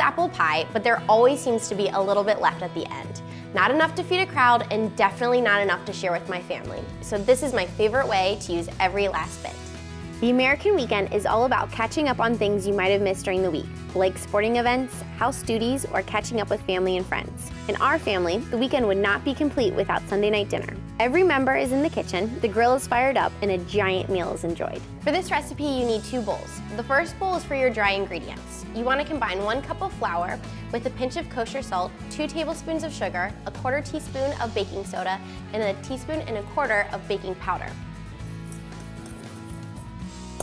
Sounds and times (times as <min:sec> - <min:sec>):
Speech: 0:00.0 - 0:09.6, 0:10.2 - 0:37.7
Music: 0:00.0 - 0:40.4.